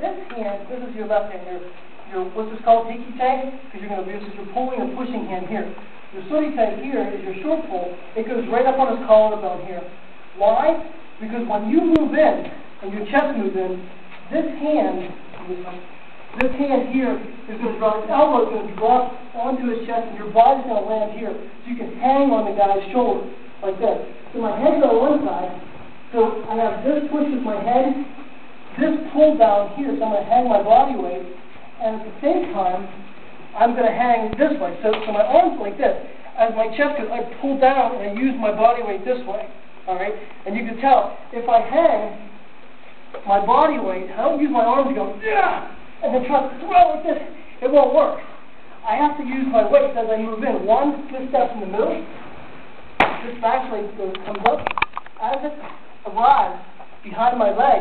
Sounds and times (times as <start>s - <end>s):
Speech: 0.0s - 33.0s, 33.6s - 42.3s, 43.2s - 52.2s, 53.2s - 57.8s.